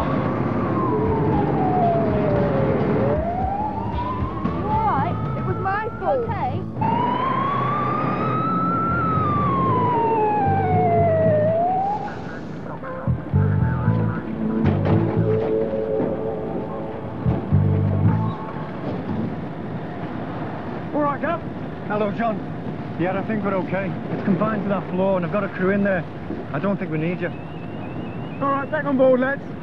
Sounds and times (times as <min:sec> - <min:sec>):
Police car (siren): 0:00.0 - 0:19.4, 0:26.9 - 0:29.6.